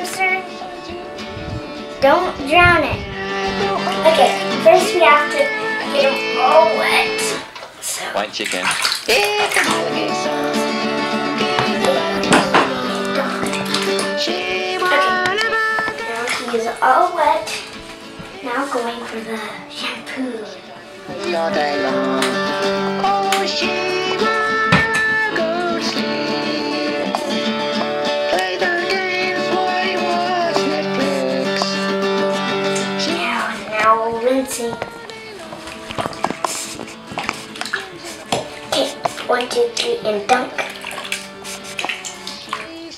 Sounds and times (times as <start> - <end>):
Child speech, kid speaking: 0.0 - 0.6, 2.0 - 3.1, 3.8 - 8.1, 13.1 - 13.5, 16.0 - 17.6, 18.4 - 20.6, 33.0 - 34.8, 38.8 - 40.7
Music: 0.0 - 7.6, 8.4 - 42.9.